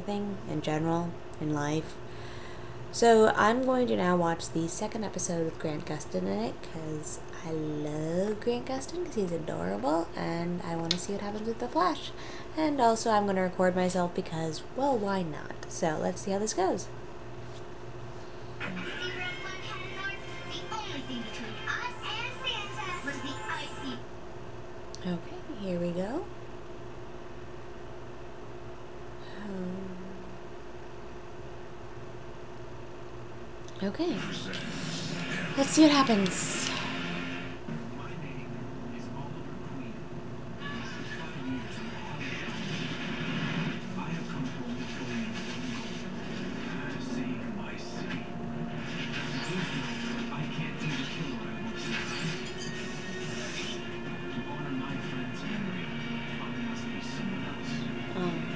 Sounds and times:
Speech: 0.0s - 2.0s, 3.0s - 16.9s, 25.0s - 26.3s, 33.8s - 34.6s, 35.6s - 36.8s.

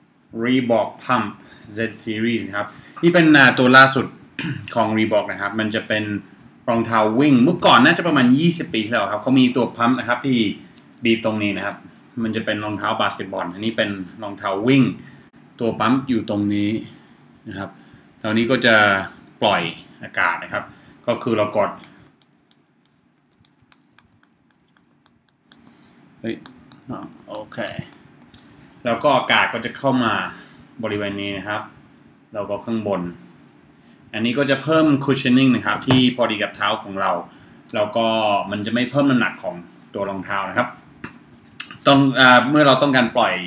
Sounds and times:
Speech: 0.3s - 22.0s, 26.2s - 28.0s, 28.8s - 33.2s, 34.1s - 43.4s.

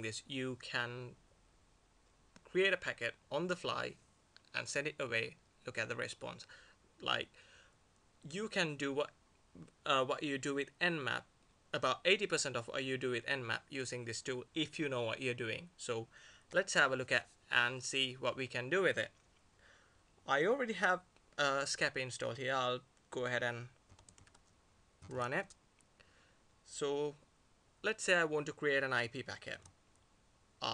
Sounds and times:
Speech: 0.0s - 1.2s, 2.5s - 7.3s, 8.2s - 19.2s, 20.2s - 23.8s, 25.0s - 25.6s, 26.7s - 27.2s, 27.8s - 29.7s.

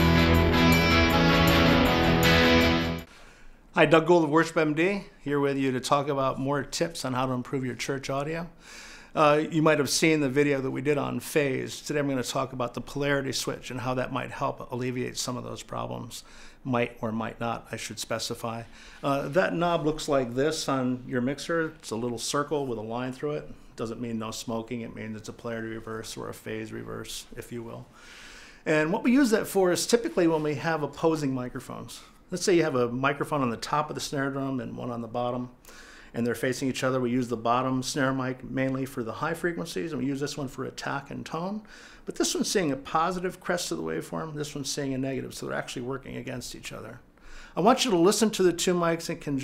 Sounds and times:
Speech: 3.8s - 8.6s, 9.2s - 27.9s, 28.7s - 35.6s, 36.2s - 49.4s.

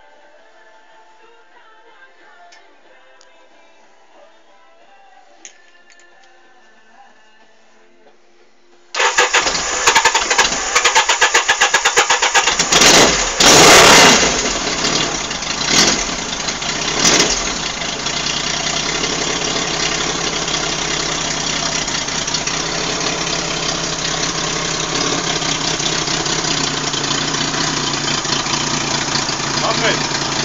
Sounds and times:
Idling: 9.0s - 30.4s
Medium engine (mid frequency): 9.0s - 30.4s
Vehicle: 9.0s - 30.4s.

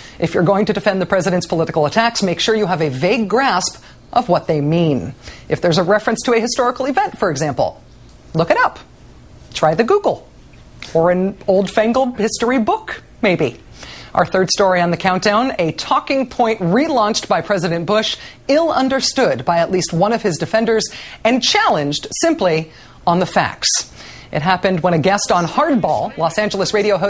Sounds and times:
Speech: 0.2s - 7.8s, 10.9s - 13.6s, 14.2s - 27.0s.

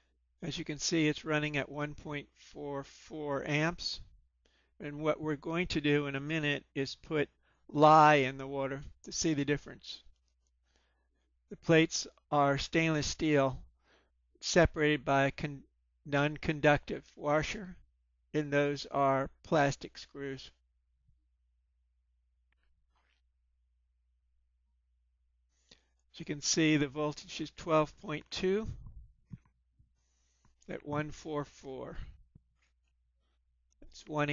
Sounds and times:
Speech: 0.4s - 4.1s, 4.8s - 10.1s, 11.5s - 13.7s, 14.4s - 17.8s, 18.4s - 20.6s, 26.2s - 28.9s, 30.7s - 32.2s, 33.8s - 34.3s.

